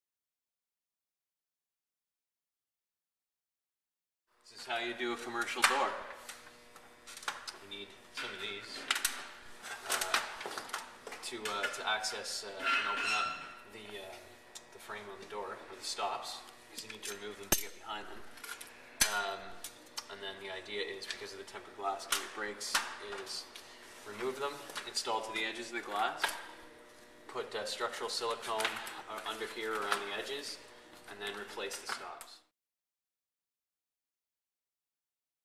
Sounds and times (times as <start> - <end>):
Speech: 4.5 - 6.1, 7.5 - 8.9, 11.2 - 18.3, 19.0 - 26.4, 27.3 - 32.5.